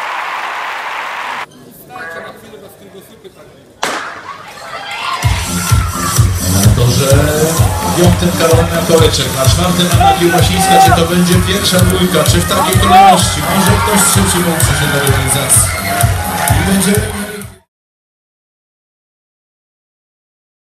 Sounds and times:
Music: 5.1 - 17.7
Speech: 6.8 - 15.6, 16.6 - 17.6.

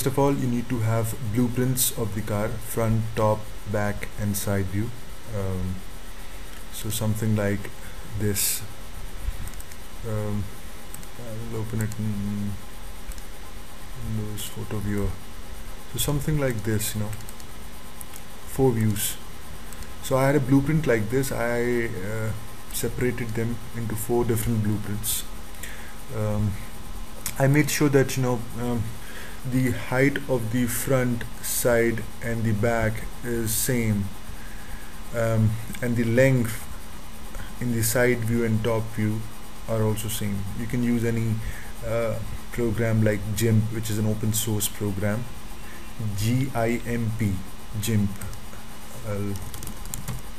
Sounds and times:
Speech: 0.0 - 5.8, 6.7 - 8.7, 10.0 - 10.5, 11.2 - 12.6, 14.0 - 15.2, 15.9 - 17.2, 18.5 - 19.2, 20.0 - 25.3, 26.1 - 26.6, 27.2 - 34.2, 35.1 - 36.7, 37.4 - 45.4, 46.0 - 48.4, 49.0 - 49.4.

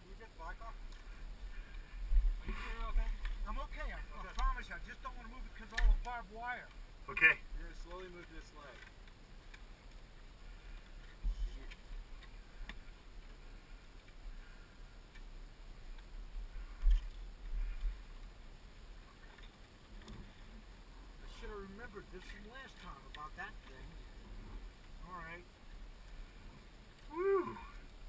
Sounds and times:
Speech: 0.0 - 0.8, 2.5 - 8.8, 21.2 - 24.0.

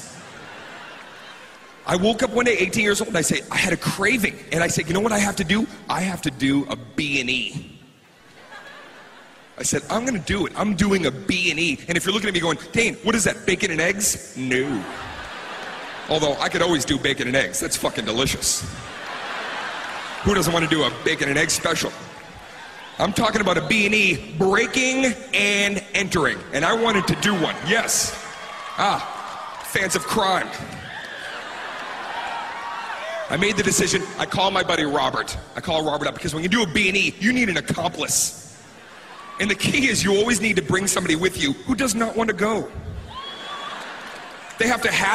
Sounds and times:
Speech: 1.8 - 7.7, 9.6 - 14.9, 16.1 - 18.8, 20.2 - 22.0, 23.0 - 28.2, 28.8 - 29.1, 29.7 - 30.7, 33.2 - 38.4, 39.4 - 42.8, 44.6 - 45.1.

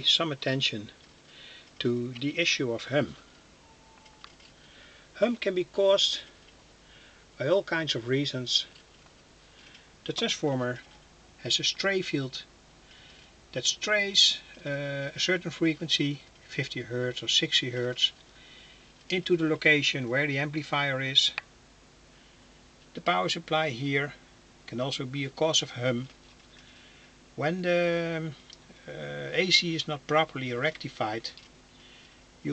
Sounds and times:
Speech: 0.0 - 1.0, 1.8 - 3.3, 5.2 - 6.4, 7.4 - 8.8, 10.0 - 12.5, 13.5 - 18.2, 19.1 - 21.4, 23.0 - 26.2, 27.4 - 31.4.

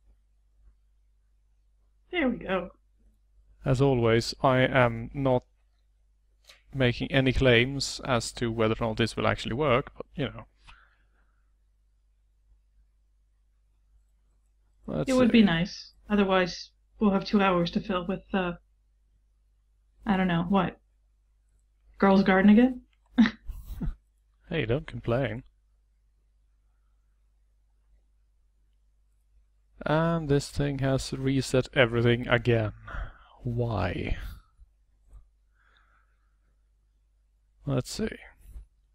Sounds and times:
Speech: 2.2 - 2.7, 3.7 - 5.4, 6.8 - 10.4, 14.9 - 18.6, 20.1 - 20.8, 22.0 - 23.4, 24.5 - 25.4, 29.8 - 34.4, 37.7 - 38.4.

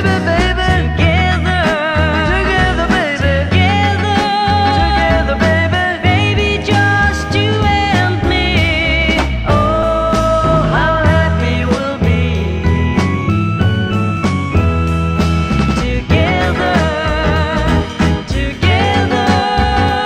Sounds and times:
Psychedelic rock: 0.0 - 20.0.

